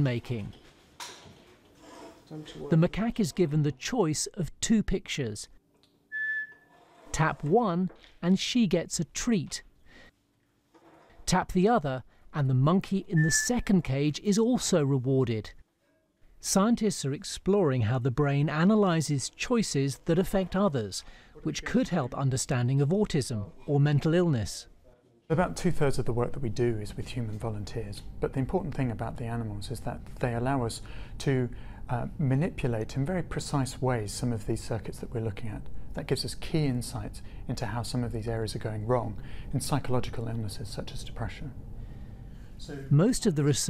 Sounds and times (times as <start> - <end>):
Speech: 0.0 - 0.6, 2.3 - 5.6, 7.1 - 9.7, 11.3 - 15.6, 16.4 - 41.6, 42.6 - 43.6.